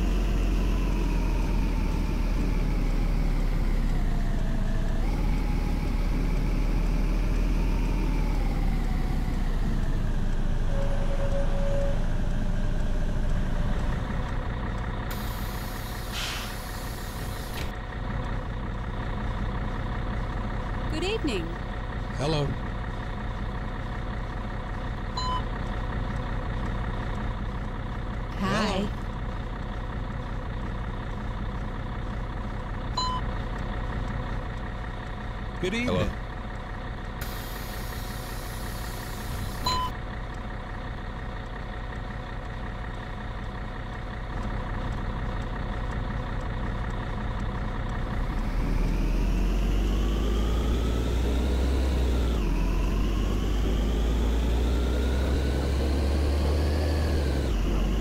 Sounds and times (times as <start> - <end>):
Vehicle: 0.0 - 58.0.